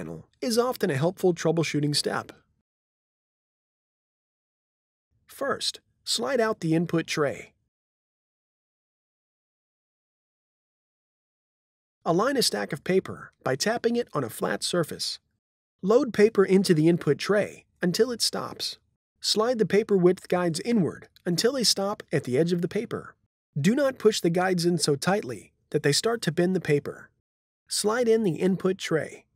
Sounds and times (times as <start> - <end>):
Speech: 0.0 - 2.4, 5.3 - 7.6, 12.1 - 27.1, 27.7 - 29.3.